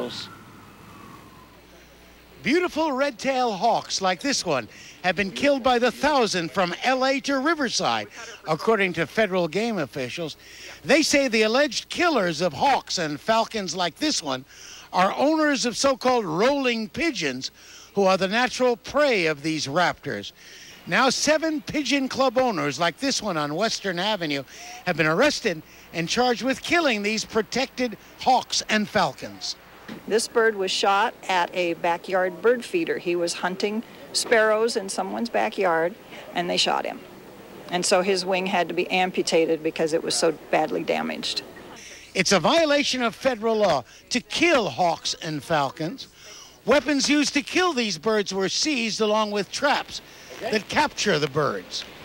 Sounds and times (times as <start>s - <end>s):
Speech: 2.4s - 14.4s, 20.9s - 37.0s, 37.7s - 41.4s, 42.1s - 51.9s.